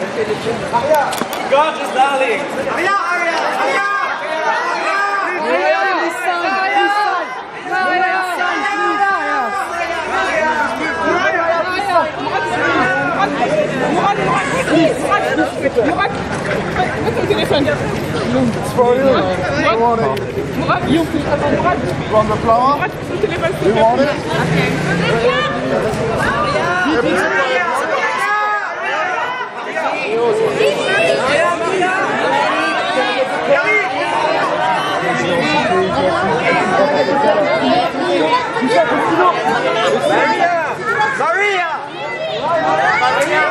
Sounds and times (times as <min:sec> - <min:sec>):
Hubbub, speech noise, speech babble: 0:00.0 - 0:43.5
Outside, urban or manmade: 0:00.0 - 0:43.5.